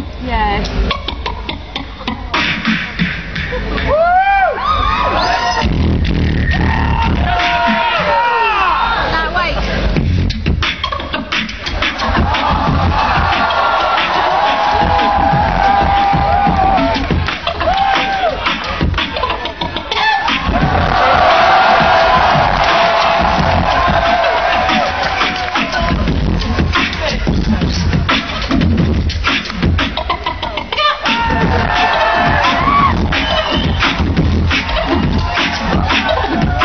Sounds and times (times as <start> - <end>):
Music: 0.0 - 36.6.